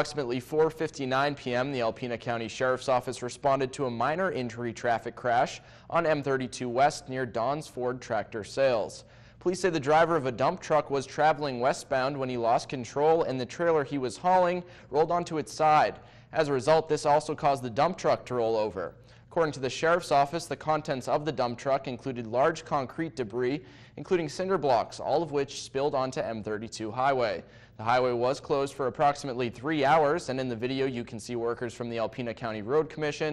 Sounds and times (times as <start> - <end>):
Speech: 0.0 - 33.3.